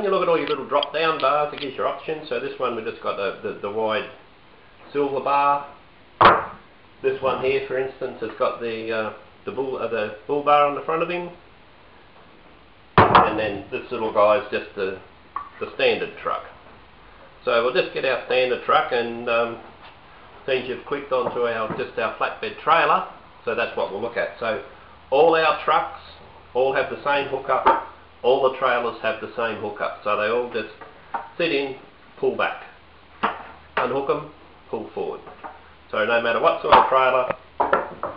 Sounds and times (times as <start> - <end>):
Speech: 0.0 - 4.2, 4.9 - 5.8, 7.0 - 11.4, 13.2 - 16.6, 17.4 - 19.7, 20.4 - 30.8, 31.4 - 32.8, 33.8 - 37.4.